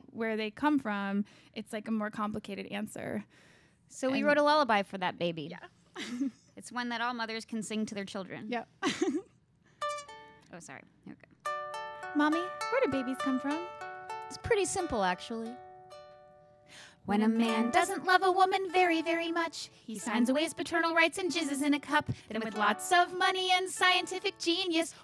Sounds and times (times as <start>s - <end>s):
Speech: 4.0s - 5.7s, 6.6s - 8.7s, 10.5s - 11.3s, 12.2s - 13.7s, 14.4s - 15.6s
Music: 9.8s - 10.6s, 11.4s - 25.0s.